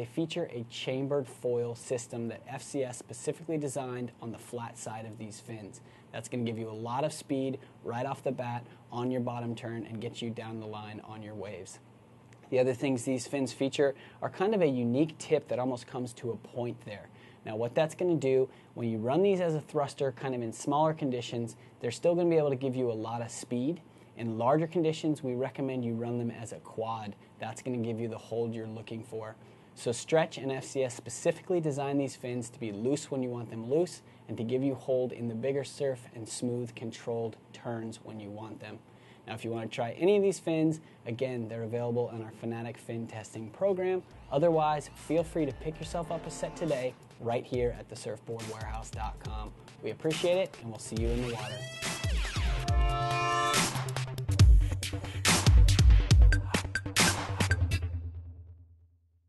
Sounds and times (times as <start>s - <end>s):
Speech: 0.0s - 11.9s, 12.5s - 51.6s
Music: 44.1s - 58.8s.